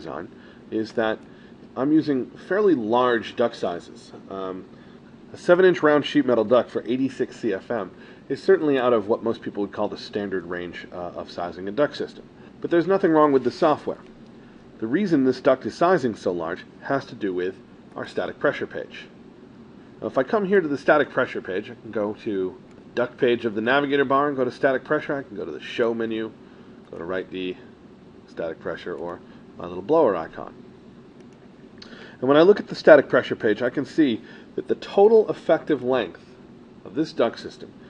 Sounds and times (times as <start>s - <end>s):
Speech: 0.0s - 4.7s, 5.3s - 14.1s, 14.8s - 19.2s, 20.0s - 27.7s, 28.3s - 30.6s, 32.2s - 37.8s.